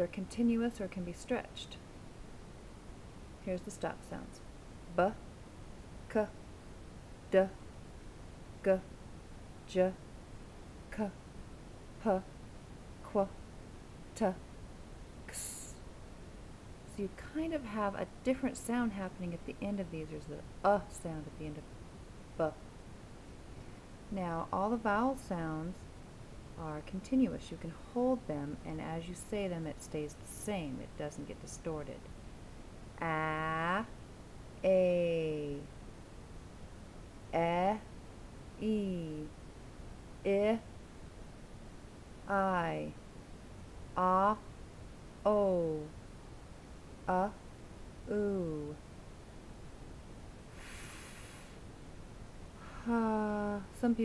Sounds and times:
Speech: 0:00.0 - 0:01.8, 0:03.4 - 0:05.2, 0:06.1 - 0:06.4, 0:07.3 - 0:07.6, 0:08.6 - 0:08.9, 0:09.7 - 0:10.0, 0:10.9 - 0:11.2, 0:12.0 - 0:12.3, 0:13.0 - 0:13.3, 0:14.2 - 0:14.4, 0:15.3 - 0:15.8, 0:16.9 - 0:21.6, 0:22.4 - 0:22.6, 0:24.1 - 0:25.8, 0:26.6 - 0:32.1, 0:33.0 - 0:33.9, 0:34.6 - 0:35.7, 0:37.3 - 0:37.9, 0:38.6 - 0:39.3, 0:40.3 - 0:40.7, 0:42.3 - 0:43.0, 0:44.0 - 0:44.4, 0:45.3 - 0:46.0, 0:47.1 - 0:47.4, 0:48.1 - 0:48.8, 0:52.8 - 0:54.0.

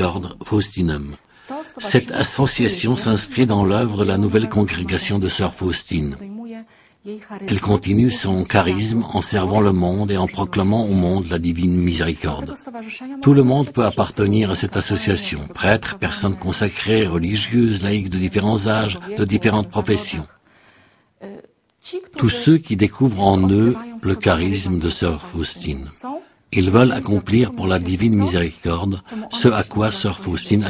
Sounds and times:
Speech: 0:00.0 - 0:20.4, 0:21.2 - 0:30.6.

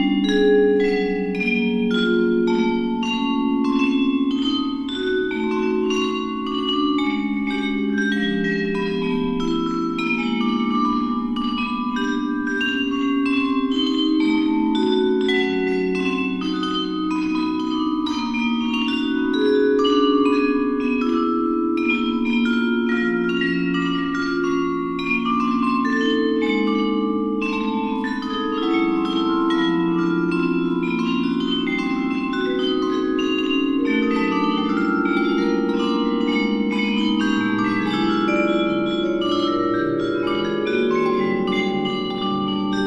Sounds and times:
Marimba, xylophone: 0:00.0 - 0:42.8
Vibraphone: 0:00.0 - 0:42.8.

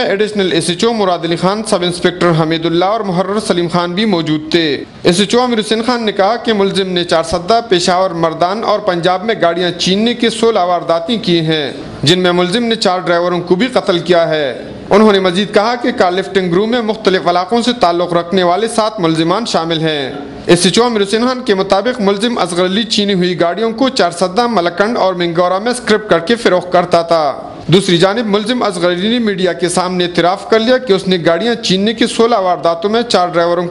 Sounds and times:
Speech: 0:00.0 - 0:33.7.

